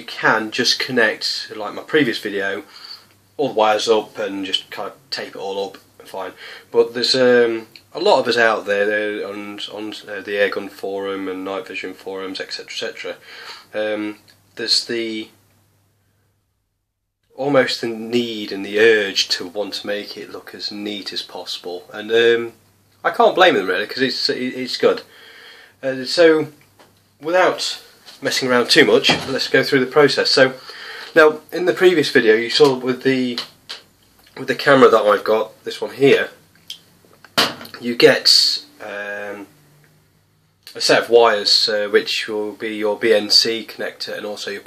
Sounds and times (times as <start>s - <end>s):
Speech: 0.0s - 2.7s, 3.4s - 15.4s, 17.3s - 25.1s, 25.8s - 26.6s, 27.2s - 36.4s, 37.7s - 39.5s, 40.7s - 44.6s.